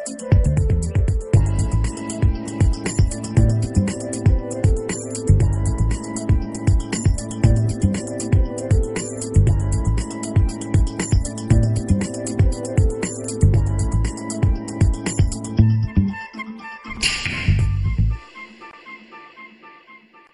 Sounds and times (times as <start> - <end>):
Arrow: 17.0 - 17.8.